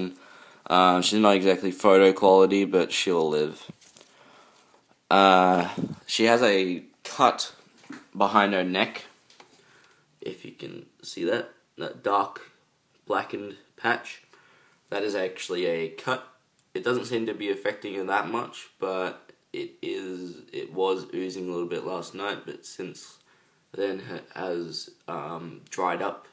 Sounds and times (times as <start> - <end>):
Speech: 0.0 - 3.7, 5.1 - 9.1, 10.2 - 14.3, 14.9 - 26.3.